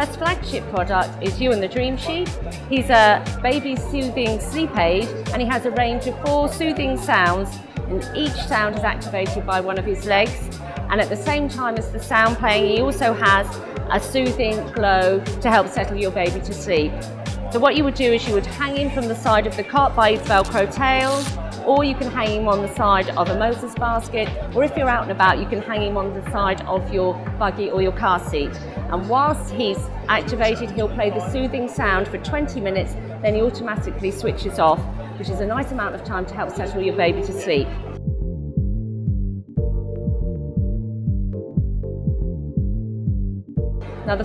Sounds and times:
Speech: 0.0s - 37.9s
Music: 0.0s - 44.2s.

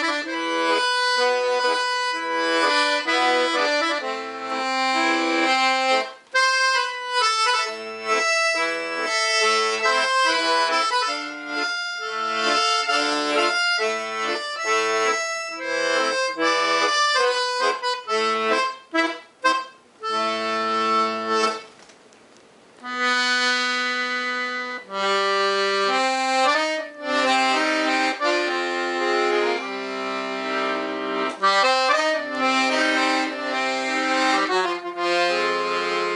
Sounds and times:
Accordion: 0.0s - 21.9s, 22.8s - 36.1s.

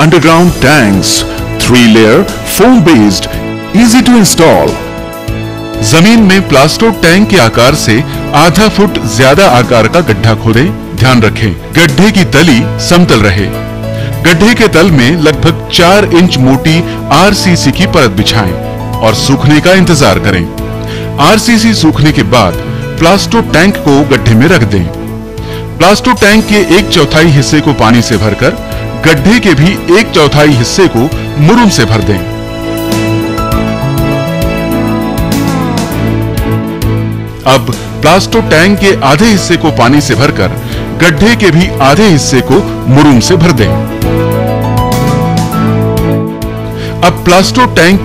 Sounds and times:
Speech: 0.0s - 4.8s, 5.8s - 13.6s, 14.2s - 20.5s, 21.2s - 25.0s, 25.8s - 32.3s, 37.5s - 43.8s, 47.0s - 48.0s
Music: 0.0s - 48.0s.

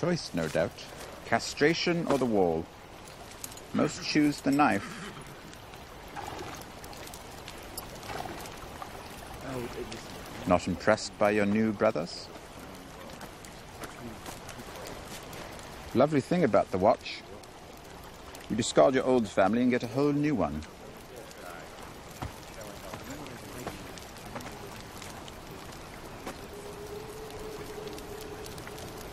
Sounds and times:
Speech: 0.0s - 2.7s, 3.8s - 4.9s, 9.4s - 13.2s, 14.0s - 15.0s, 15.9s - 17.5s, 18.5s - 21.7s, 22.6s - 24.8s.

